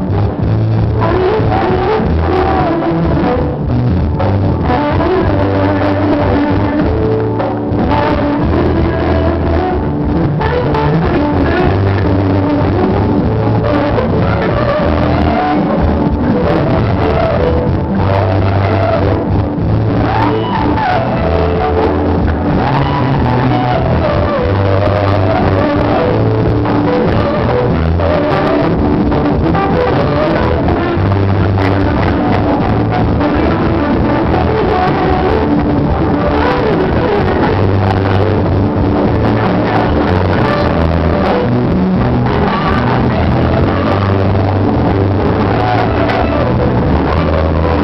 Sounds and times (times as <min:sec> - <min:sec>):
Electric guitar: 0:00.0 - 0:47.8.